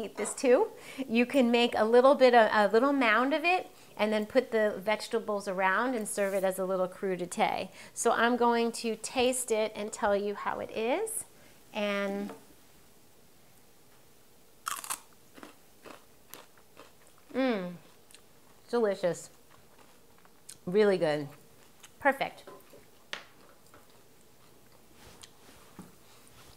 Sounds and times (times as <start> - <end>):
Speech: 0.0 - 12.4, 20.7 - 21.4, 22.0 - 22.5
Inside, small room: 0.0 - 26.5
Chewing, mastication: 14.7 - 18.7, 19.3 - 20.6, 21.3 - 22.0, 22.6 - 25.4.